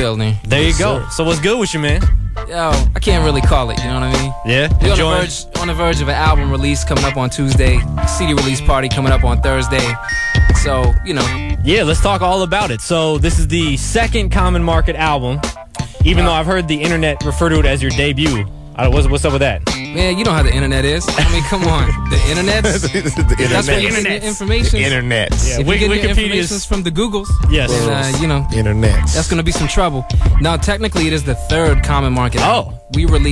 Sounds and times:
Speech: 0.0s - 10.0s, 10.6s - 33.3s
Music: 0.0s - 33.3s.

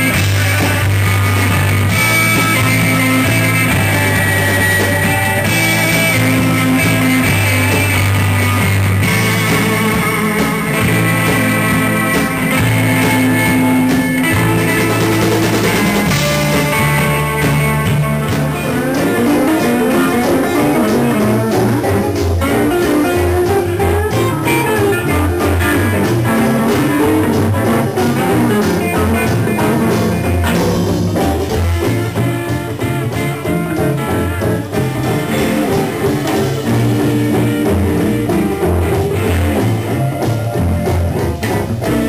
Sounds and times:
Electric guitar: 0.0s - 42.0s.

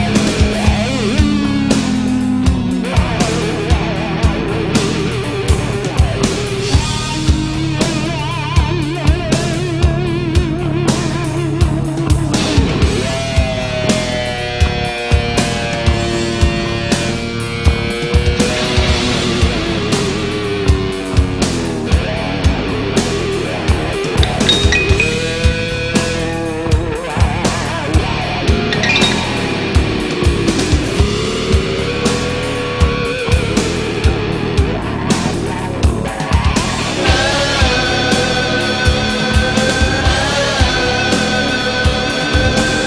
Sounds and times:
Heavy metal: 0.0s - 42.8s.

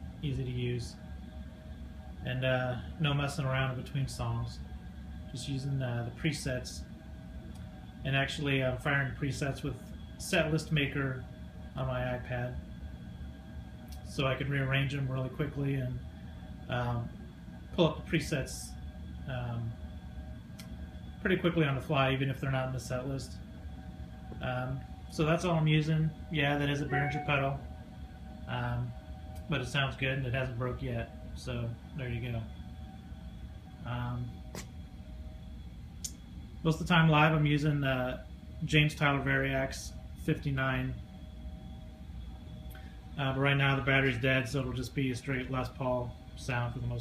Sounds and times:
Speech: 0.2s - 1.0s, 2.2s - 4.6s, 5.3s - 6.9s, 8.0s - 12.6s, 14.0s - 16.1s, 16.7s - 17.2s, 17.8s - 19.8s, 21.2s - 23.4s, 24.4s - 27.6s, 28.5s - 32.5s, 33.8s - 34.4s, 36.6s - 41.0s, 43.2s - 47.0s.

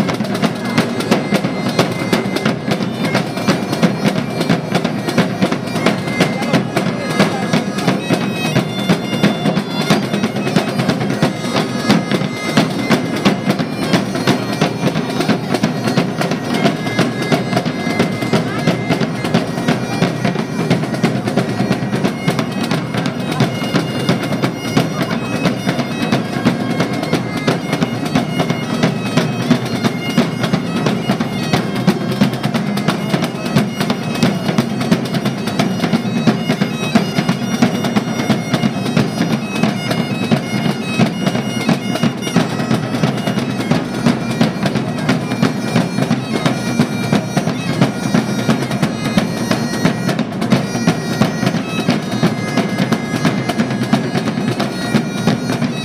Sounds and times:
Music: 0.0s - 55.8s.

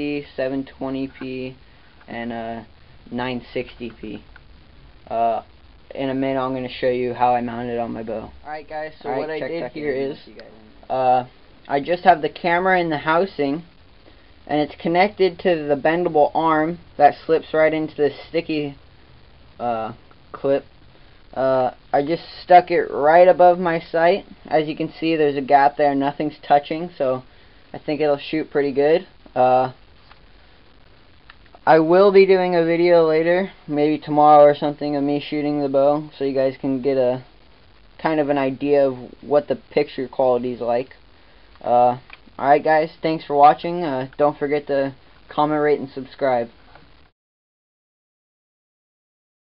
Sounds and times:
Speech: 0.0s - 4.2s, 5.1s - 13.7s, 14.5s - 18.8s, 19.6s - 20.7s, 21.4s - 29.8s, 31.6s - 37.3s, 38.0s - 41.0s, 41.6s - 46.6s.

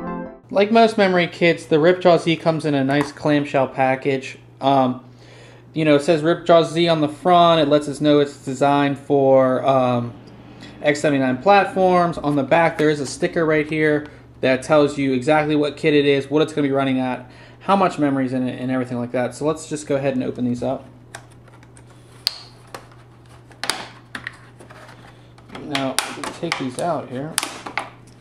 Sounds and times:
Speech: 0.5s - 5.0s, 5.8s - 10.2s, 10.8s - 20.9s, 25.5s - 27.4s.

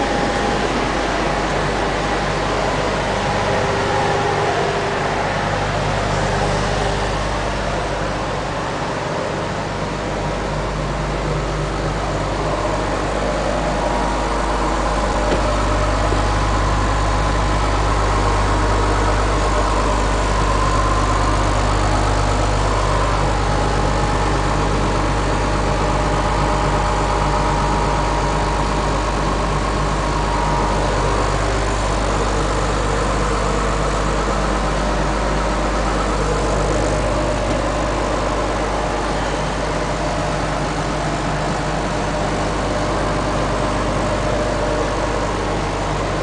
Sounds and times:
Bus: 0.0s - 46.2s.

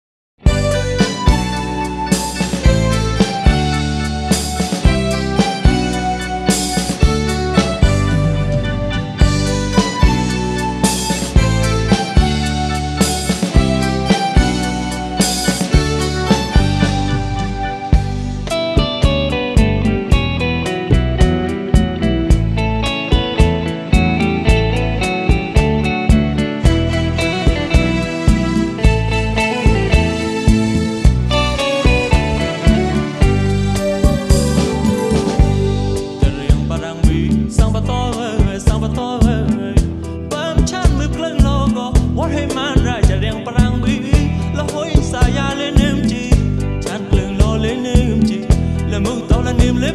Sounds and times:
Funk: 0.4s - 49.9s
Dance music: 26.6s - 37.6s.

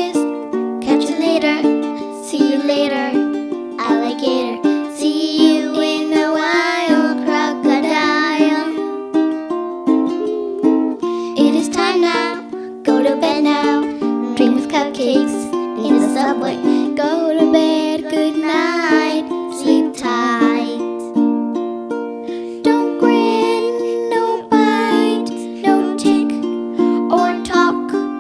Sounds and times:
Lullaby: 0.0s - 21.3s, 22.3s - 28.2s.

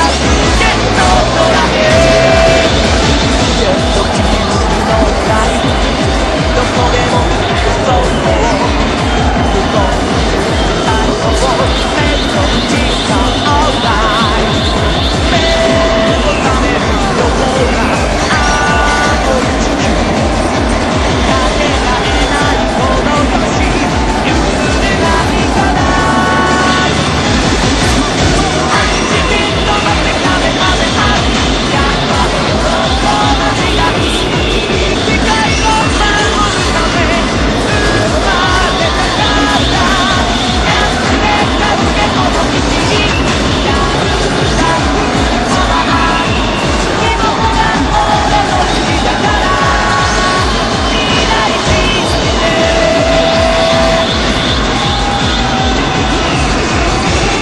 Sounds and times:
Music: 0.0s - 57.4s.

